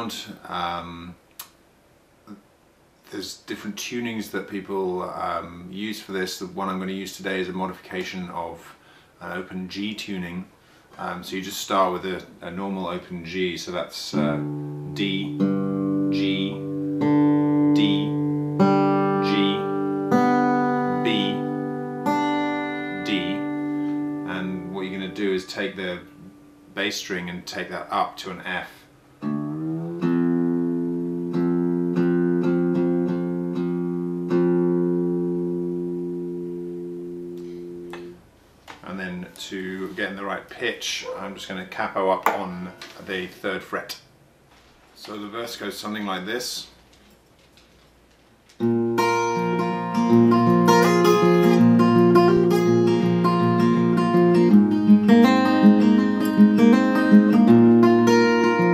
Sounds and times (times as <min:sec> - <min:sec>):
Speech: 0:00.0 - 0:01.2, 0:03.1 - 0:15.4, 0:16.1 - 0:16.6, 0:17.8 - 0:18.2, 0:19.2 - 0:19.7, 0:21.0 - 0:21.5, 0:23.0 - 0:23.5, 0:24.3 - 0:26.1, 0:26.8 - 0:28.9, 0:38.8 - 0:44.1, 0:45.0 - 0:46.8
Music: 0:14.2 - 0:25.2, 0:29.2 - 0:38.2, 0:48.6 - 0:58.7.